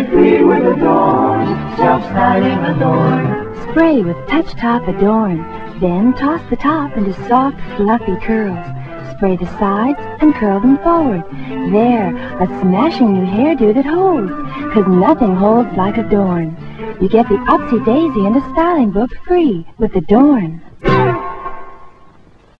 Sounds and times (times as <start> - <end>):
Music: 0.0 - 22.5
Speech: 2.9 - 20.7.